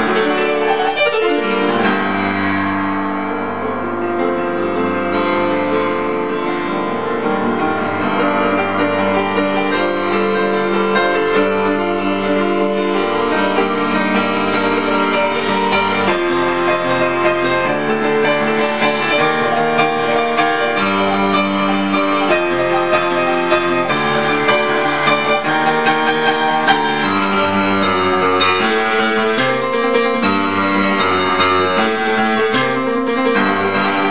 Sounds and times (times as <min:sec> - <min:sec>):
Music: 0:00.0 - 0:34.1.